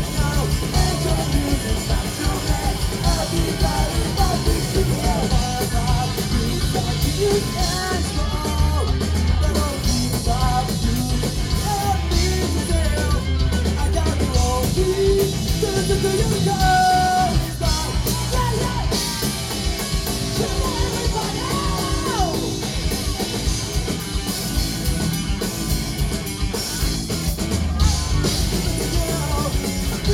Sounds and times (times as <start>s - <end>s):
Independent music: 0.0s - 30.1s.